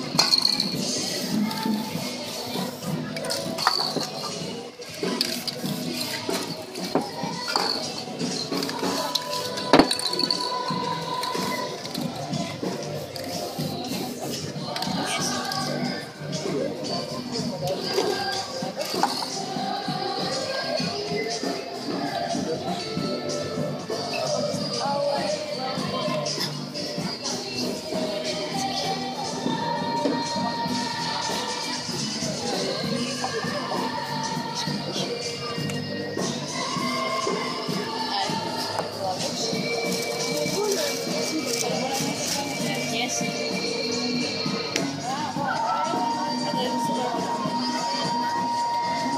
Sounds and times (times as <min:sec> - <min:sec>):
Music: 0:00.0 - 0:49.1
Speech: 0:08.7 - 0:49.1.